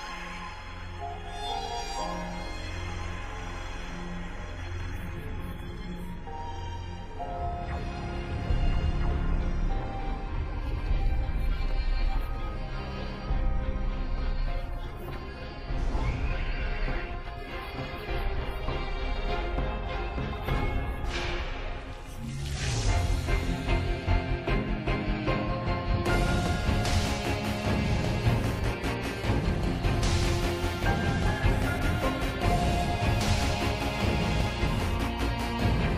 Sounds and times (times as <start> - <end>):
Music: 0.0 - 35.9.